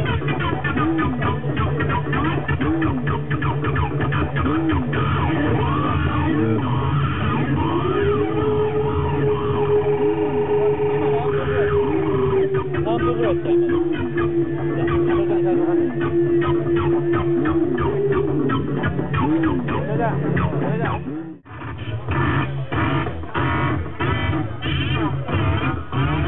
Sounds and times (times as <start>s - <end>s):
Music: 0.0s - 26.2s
Outside, urban or manmade: 0.0s - 26.2s
Speech: 10.3s - 16.2s, 19.7s - 21.1s.